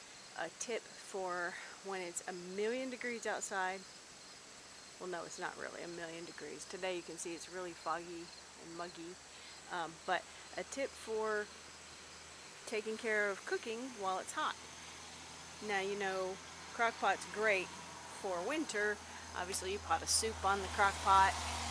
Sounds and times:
Speech: 0.4 - 3.8, 5.0 - 11.5, 12.7 - 14.6, 15.6 - 21.4.

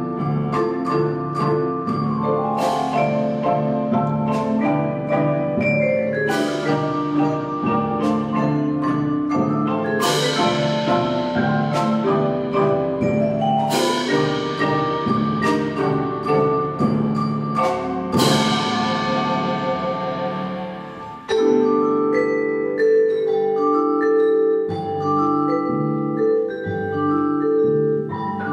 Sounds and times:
Glockenspiel: 0.0 - 28.5
Marimba, xylophone: 0.0 - 28.5.

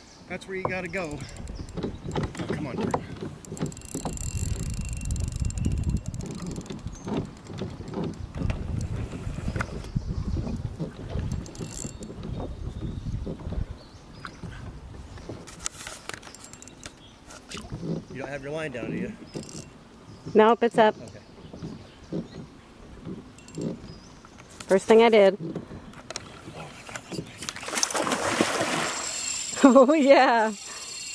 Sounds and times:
Rowboat, canoe, kayak: 0.0 - 31.1
Wind noise (microphone): 1.2 - 15.6, 17.5 - 19.6.

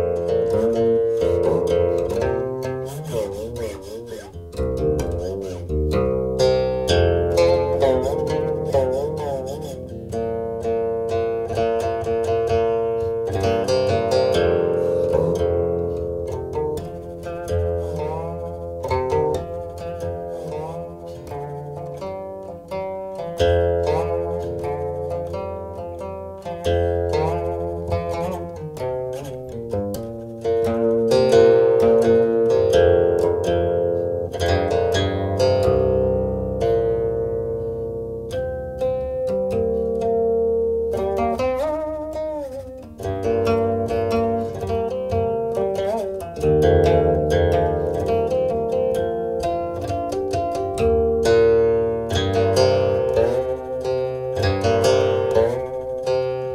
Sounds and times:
Music: 0.0 - 56.5.

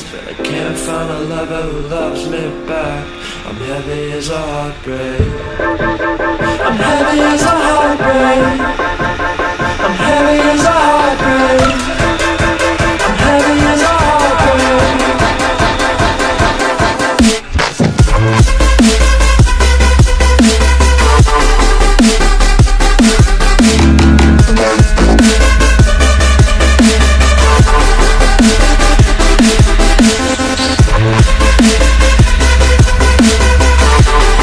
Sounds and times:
Dubstep: 0.0 - 34.4.

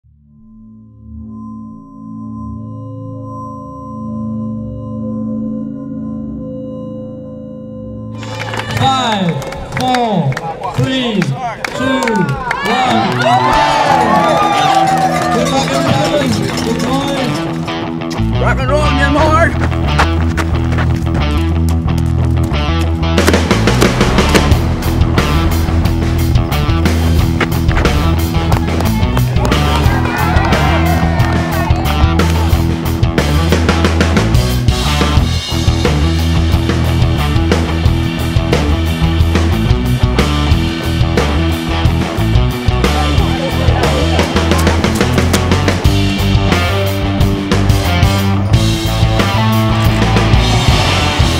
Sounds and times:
Music: 0.0 - 11.4, 12.1 - 51.3.

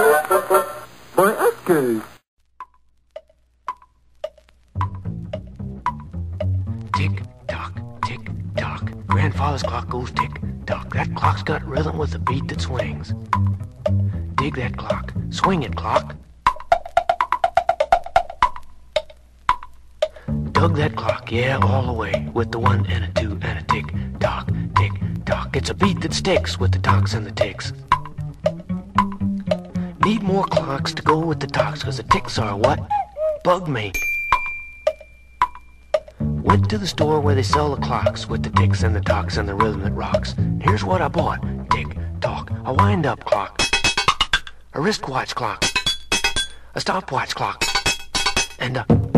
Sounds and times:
Music: 0.0 - 0.9, 2.6 - 44.8, 45.6 - 46.6, 47.6 - 49.1
Speech: 1.2 - 2.1, 7.0 - 13.1, 14.4 - 16.2, 20.6 - 27.7, 30.0 - 34.0, 36.5 - 43.6, 44.8 - 45.6, 46.8 - 47.6, 48.6 - 49.0.

